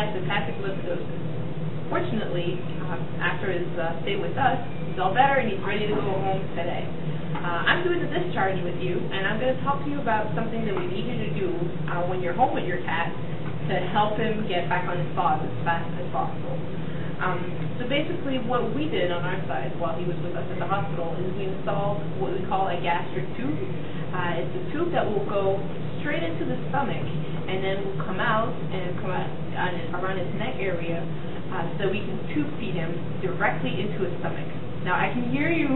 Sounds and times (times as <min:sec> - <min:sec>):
Speech: 0:00.0 - 0:01.1, 0:01.9 - 0:16.6, 0:17.2 - 0:35.7.